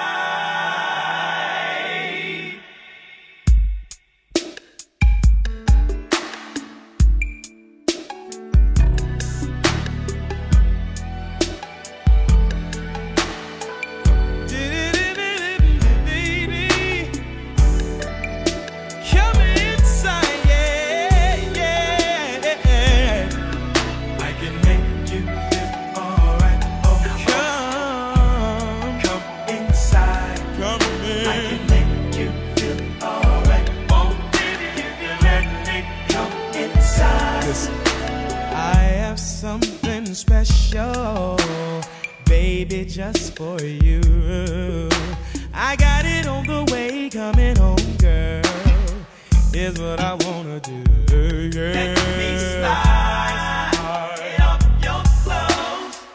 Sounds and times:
Music: 0:00.0 - 0:56.1.

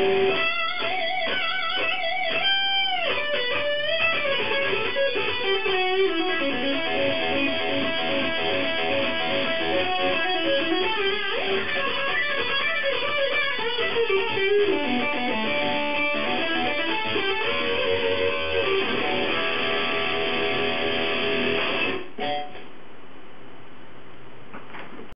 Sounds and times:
Electric guitar: 0:00.0 - 0:22.7.

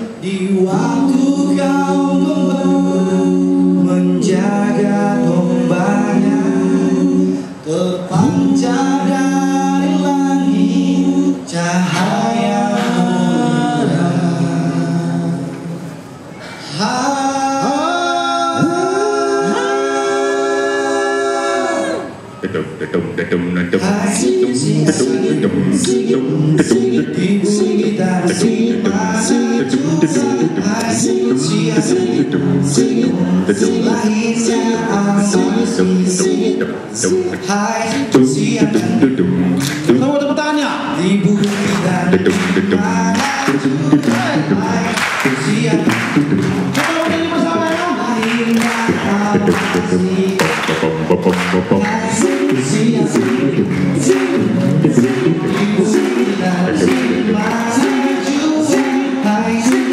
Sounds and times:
A capella: 0:00.0 - 0:59.9
Male singing: 0:00.1 - 0:15.6, 0:16.7 - 0:21.6, 0:23.6 - 0:46.2, 0:46.8 - 0:59.9.

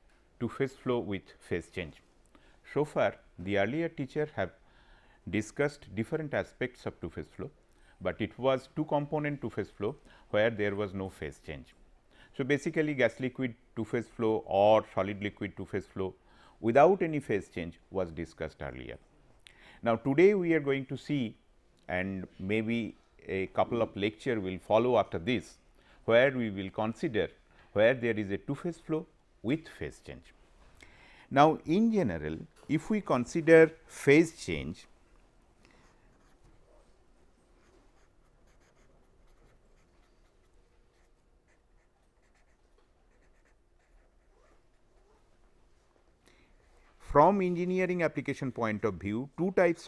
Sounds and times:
Speech: 0:00.4 - 0:02.1, 0:02.7 - 0:04.6, 0:05.3 - 0:11.8, 0:12.4 - 0:19.0, 0:19.8 - 0:30.4, 0:31.3 - 0:34.9, 0:47.0 - 0:49.8.

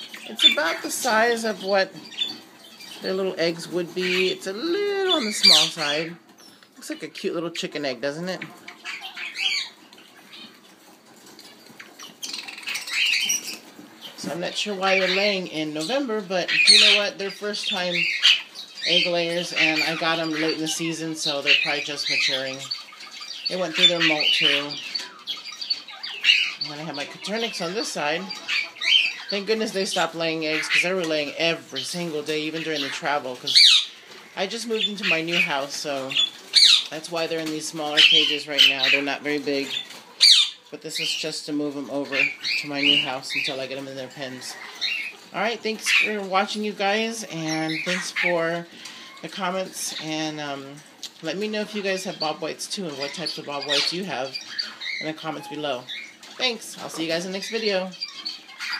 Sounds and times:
Bird: 0:00.0 - 0:07.1, 0:08.2 - 0:58.7
Speech: 0:00.3 - 0:02.0, 0:03.0 - 0:06.2, 0:06.8 - 0:08.5, 0:14.2 - 0:18.2, 0:18.8 - 0:22.7, 0:23.5 - 0:24.9, 0:26.6 - 0:28.4, 0:29.3 - 0:33.6, 0:34.4 - 0:36.3, 0:36.9 - 0:39.8, 0:40.8 - 0:44.6, 0:45.3 - 0:54.4, 0:55.0 - 0:58.0
Domestic animals, pets: 0:08.4 - 0:14.2, 0:28.2 - 0:29.4, 0:44.3 - 0:46.1, 0:57.9 - 0:58.7.

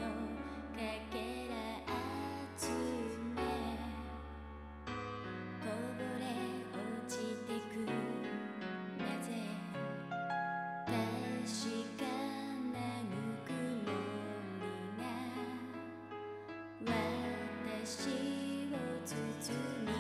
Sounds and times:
Music: 0:00.0 - 0:20.0.

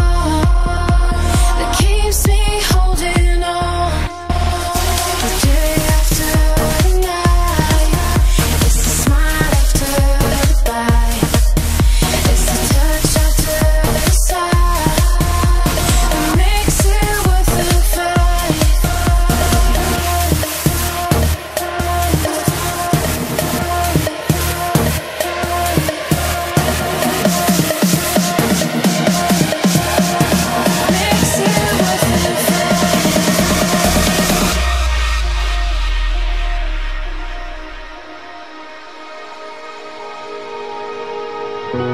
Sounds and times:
Music: 0:00.0 - 0:41.9.

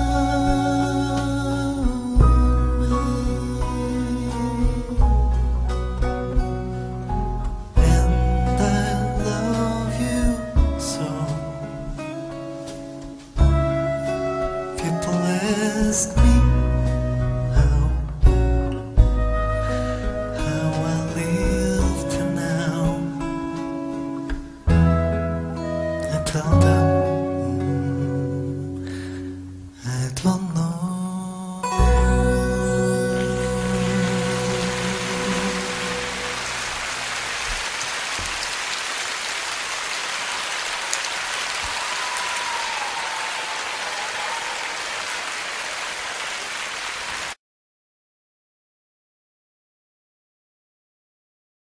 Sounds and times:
Music: 0:00.0 - 0:37.6.

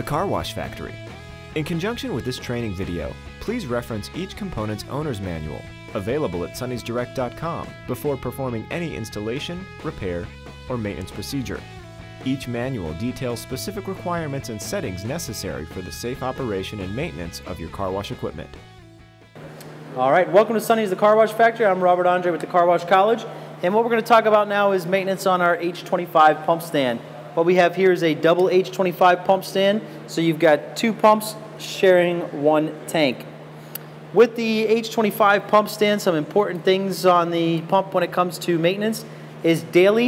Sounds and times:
Speech: 0:00.0 - 0:01.0, 0:01.6 - 0:18.6, 0:20.0 - 0:33.3, 0:34.1 - 0:40.0.

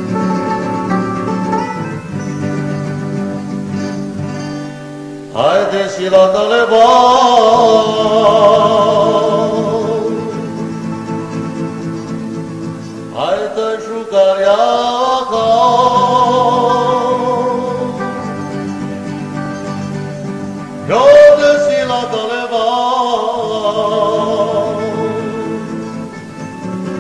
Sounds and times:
Music: 0:00.0 - 0:27.0.

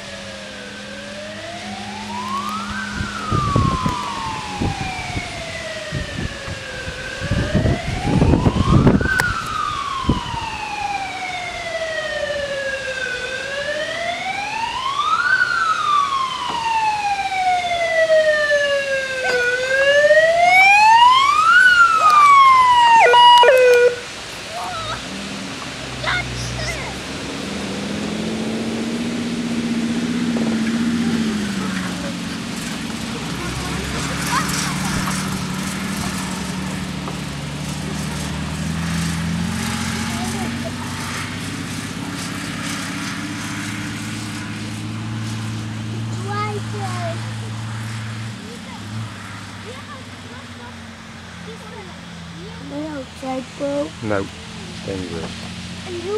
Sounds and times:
Police car (siren): 0:00.0 - 0:25.1, 0:28.5 - 0:56.1.

